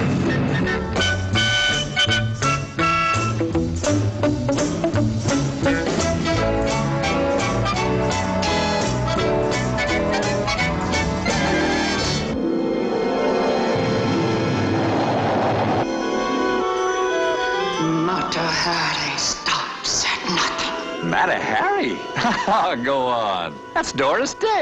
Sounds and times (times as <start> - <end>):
Music: 0.0 - 24.6
Speech: 21.1 - 24.6.